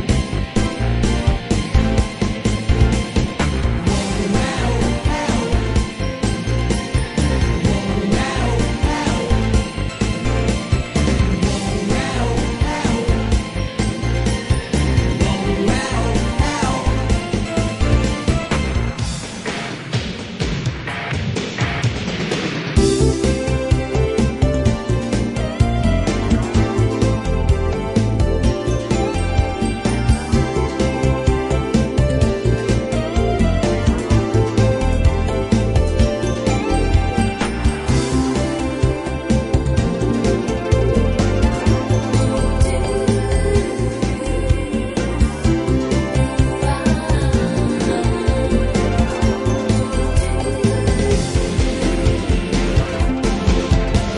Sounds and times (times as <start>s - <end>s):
Music: 0.0s - 54.1s.